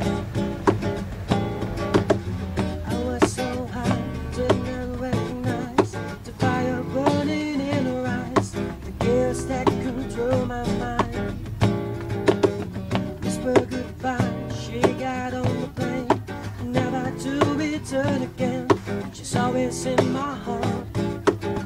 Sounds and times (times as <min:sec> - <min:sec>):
Strum: 0:00.0 - 0:21.6.